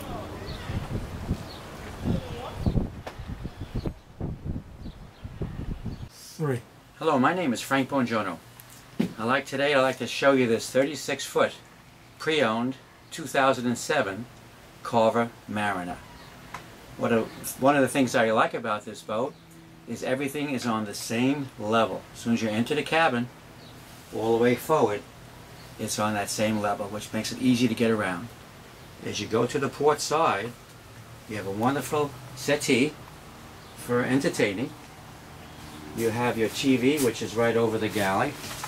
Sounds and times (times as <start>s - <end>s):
Speech: 6.1s - 8.4s, 9.1s - 11.6s, 12.2s - 16.0s, 17.0s - 23.3s, 24.1s - 25.1s, 25.8s - 28.4s, 29.0s - 30.6s, 31.3s - 33.0s, 33.8s - 34.8s, 36.0s - 38.4s.